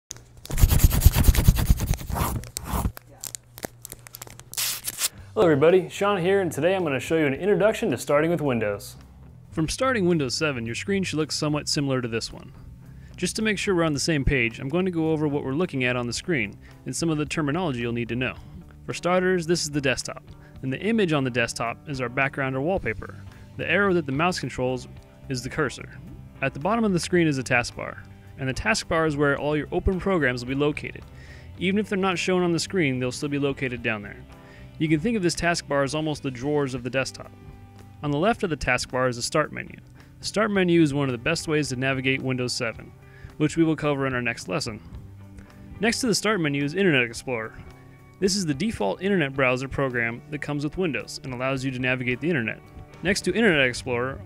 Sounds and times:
Speech: 0:05.4 - 0:09.0, 0:09.6 - 0:12.6, 0:13.2 - 0:34.2, 0:34.8 - 0:37.3, 0:38.0 - 0:44.8, 0:45.8 - 0:47.6, 0:48.2 - 0:54.2.

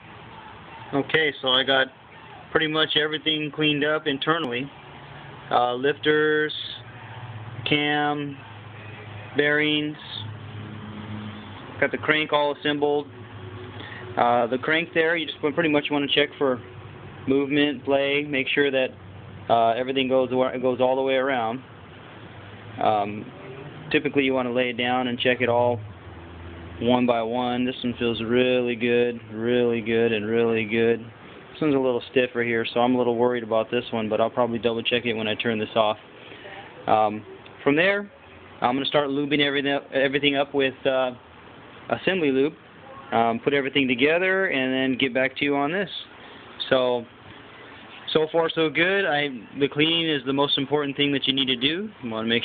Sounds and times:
Speech: 0:00.4 - 0:04.7, 0:05.5 - 0:06.9, 0:07.6 - 0:08.5, 0:09.4 - 0:10.3, 0:11.8 - 0:13.1, 0:14.2 - 0:16.6, 0:17.3 - 0:21.6, 0:22.8 - 0:25.8, 0:26.8 - 0:41.2, 0:41.9 - 0:47.1, 0:48.1 - 0:52.4.

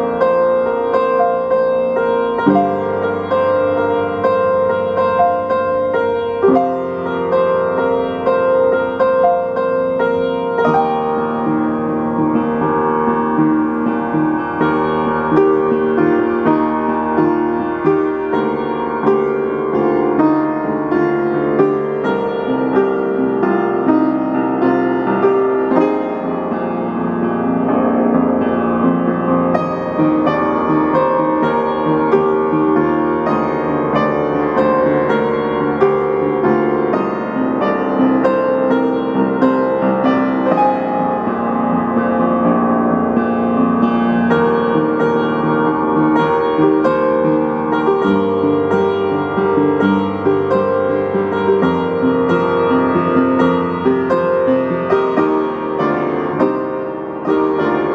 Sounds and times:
Music: 0:00.0 - 0:57.9.

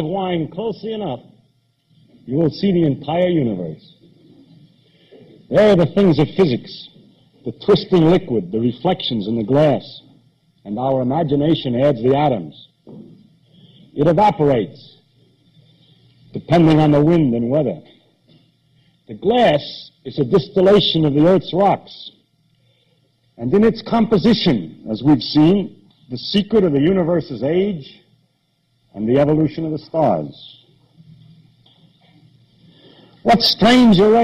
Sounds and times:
Narration, monologue: 0:00.0 - 0:34.2.

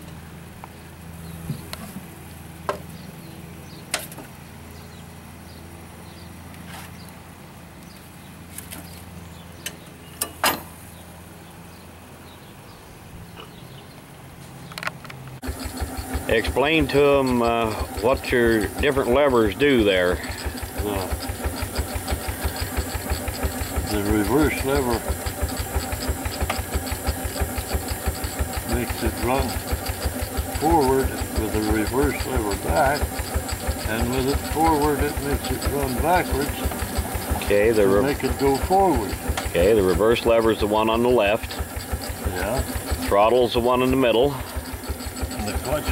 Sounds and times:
Engine: 0:00.0 - 0:45.9
Speech: 0:16.3 - 0:20.2, 0:20.8 - 0:21.2, 0:23.8 - 0:25.1, 0:28.7 - 0:29.6, 0:30.6 - 0:33.1, 0:33.9 - 0:36.6, 0:37.4 - 0:41.5, 0:42.3 - 0:44.4, 0:45.4 - 0:45.9.

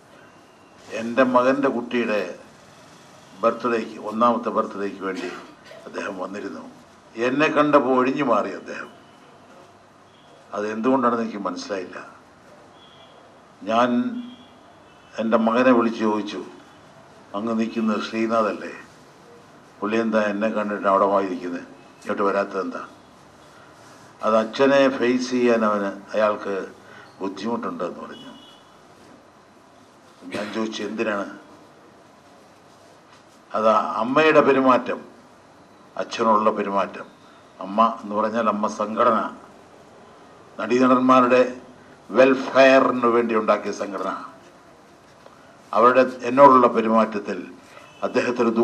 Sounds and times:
Narration, monologue: 0:00.0 - 0:48.6
Male speech, man speaking: 0:00.9 - 0:02.4, 0:03.4 - 0:09.0, 0:10.5 - 0:12.2, 0:13.6 - 0:14.3, 0:15.2 - 0:16.6, 0:17.4 - 0:18.9, 0:19.8 - 0:22.9, 0:24.2 - 0:28.4, 0:30.3 - 0:31.5, 0:33.6 - 0:35.1, 0:36.0 - 0:39.5, 0:40.6 - 0:44.4, 0:45.8 - 0:48.6.

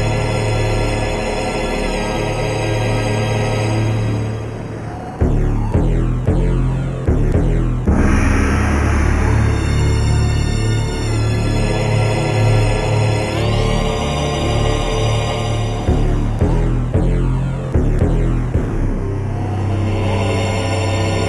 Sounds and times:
Music: 0:00.0 - 0:21.2.

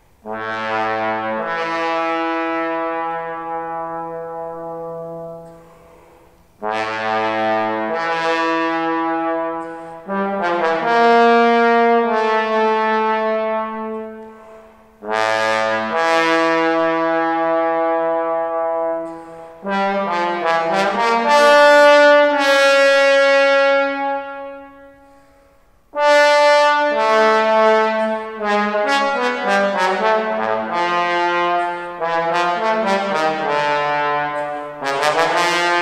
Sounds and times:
Trombone: 0:00.1 - 0:35.8.

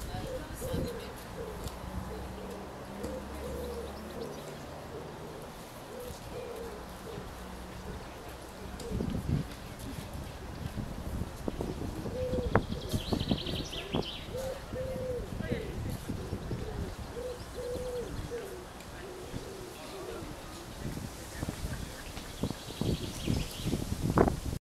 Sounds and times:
Coo: 0:00.1 - 0:09.3, 0:12.0 - 0:20.6
Chirp, tweet: 0:12.2 - 0:14.4, 0:21.7 - 0:23.8.

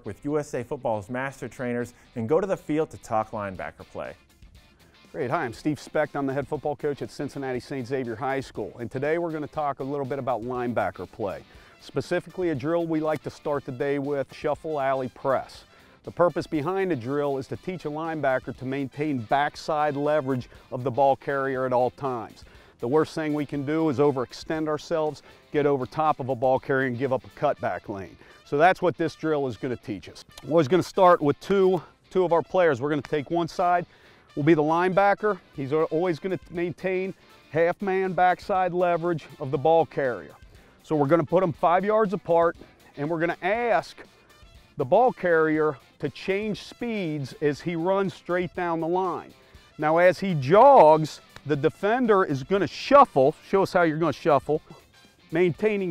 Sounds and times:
Speech: 0:00.0 - 0:04.2, 0:05.1 - 0:44.0, 0:44.8 - 0:54.6, 0:55.3 - 0:55.9
Music: 0:00.0 - 0:55.9.

